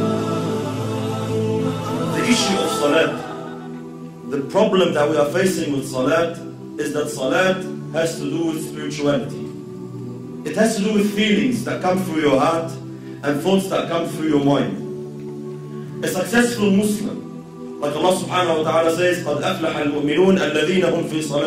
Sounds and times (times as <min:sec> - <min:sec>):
Music: 0:00.0 - 0:21.4
Male speech, man speaking: 0:02.1 - 0:03.4, 0:04.3 - 0:09.5, 0:10.4 - 0:14.8, 0:16.0 - 0:21.4.